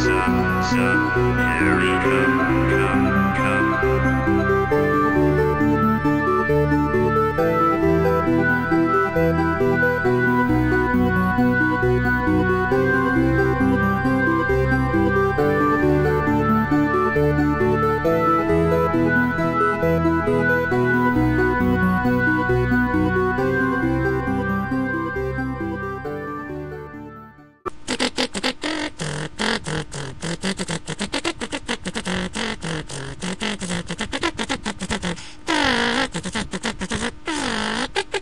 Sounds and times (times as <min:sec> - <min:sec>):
Music: 0:00.0 - 0:27.7.